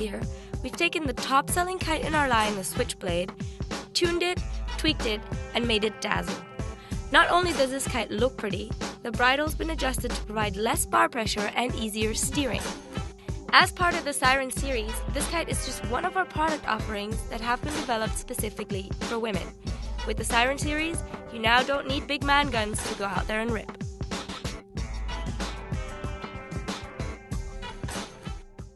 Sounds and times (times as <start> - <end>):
Speech: 0.0 - 3.3, 4.0 - 6.4, 7.1 - 12.7, 13.5 - 19.5, 20.1 - 23.8
Music: 0.0 - 28.7.